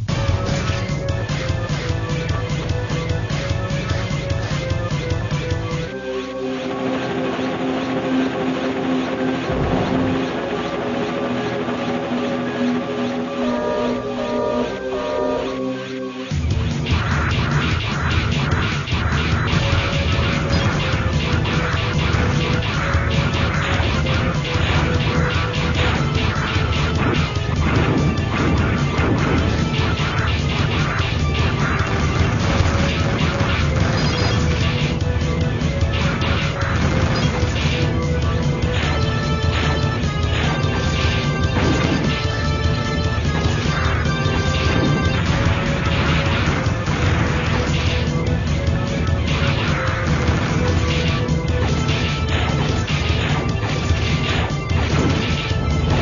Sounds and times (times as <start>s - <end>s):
Music: 0.0s - 56.0s.